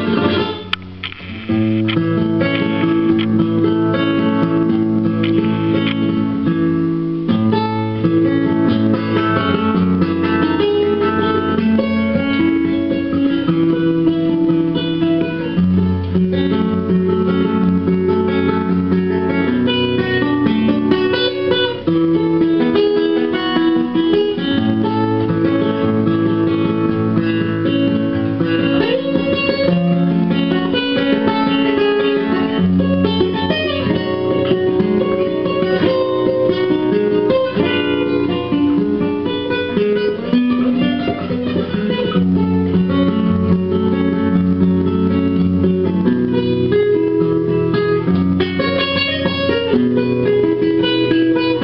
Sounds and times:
Acoustic guitar: 0.0s - 51.6s
Strum: 0.0s - 51.6s.

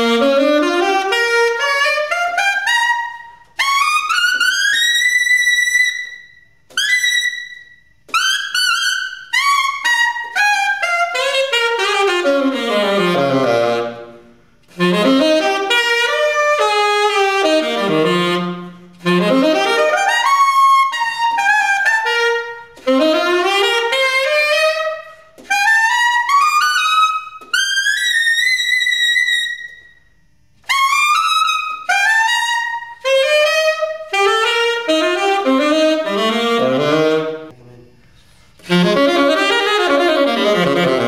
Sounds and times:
Inside, large room or hall: 0.0s - 41.0s
Saxophone: 0.0s - 41.0s.

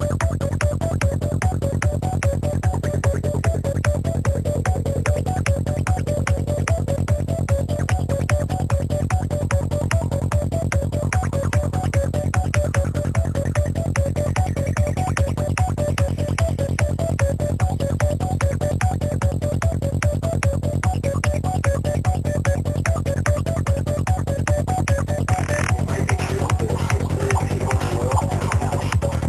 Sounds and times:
Music: 0.0s - 29.2s.

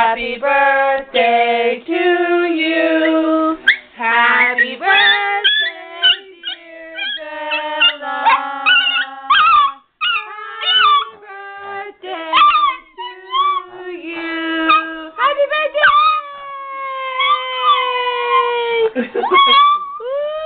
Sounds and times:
Singing: 0.0s - 15.2s
Dog: 3.6s - 11.2s, 12.3s - 13.6s, 14.7s - 14.9s, 15.8s - 16.3s, 17.2s - 18.5s, 19.2s - 20.0s.

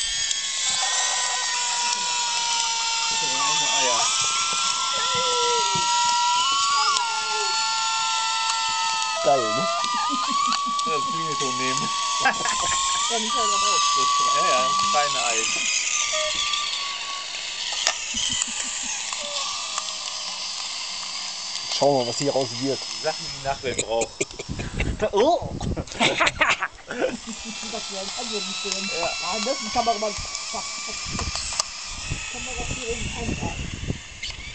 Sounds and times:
Speech: 3.1s - 4.1s, 10.9s - 12.5s, 13.1s - 15.6s, 21.8s - 24.2s.

